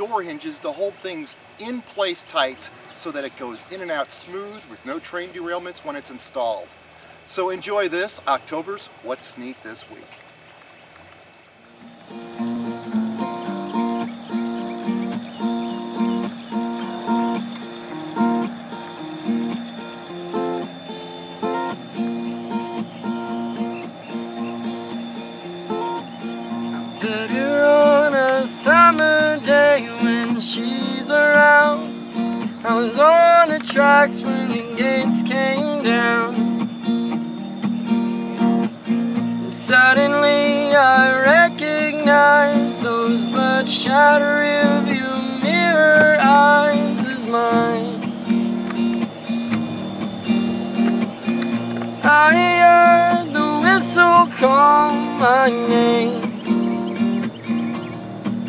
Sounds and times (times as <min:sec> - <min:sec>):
Speech: 0:00.0 - 0:06.7, 0:07.3 - 0:10.2
Music: 0:12.0 - 0:58.4.